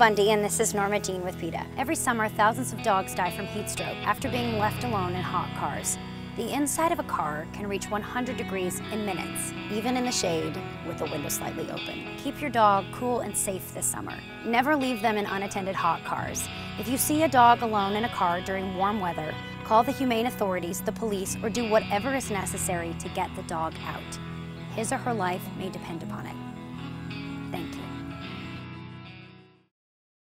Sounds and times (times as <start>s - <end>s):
Speech: 0.0s - 26.4s, 27.6s - 28.0s
Music: 0.0s - 29.7s.